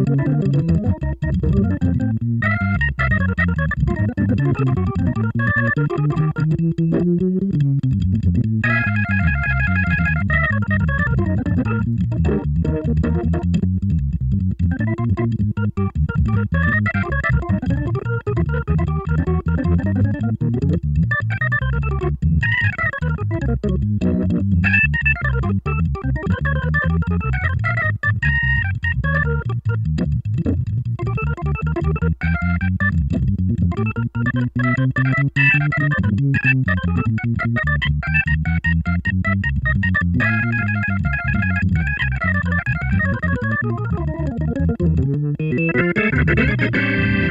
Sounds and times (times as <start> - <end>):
Piano: 0.0 - 47.3.